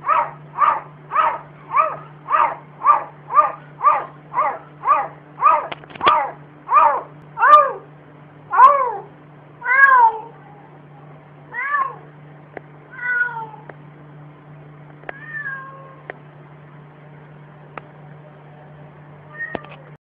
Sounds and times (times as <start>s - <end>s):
Meow: 8.6s - 10.6s, 11.5s - 12.1s, 12.9s - 13.7s, 15.1s - 16.1s, 19.3s - 20.0s.